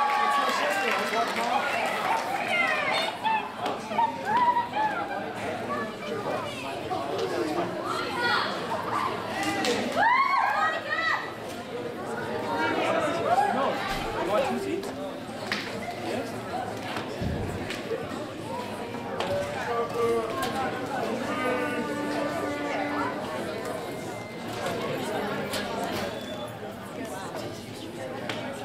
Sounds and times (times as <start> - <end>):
Speech: 0.0 - 28.6.